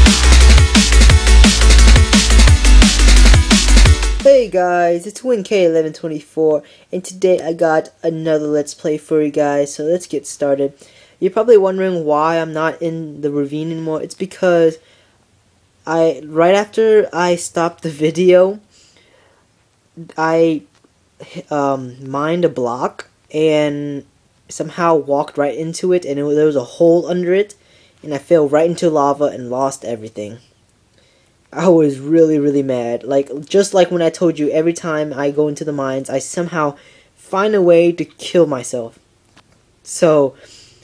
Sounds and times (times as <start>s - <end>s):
Speech: 4.2s - 14.8s, 15.8s - 18.7s, 20.0s - 30.4s, 31.5s - 39.0s, 39.8s - 40.5s.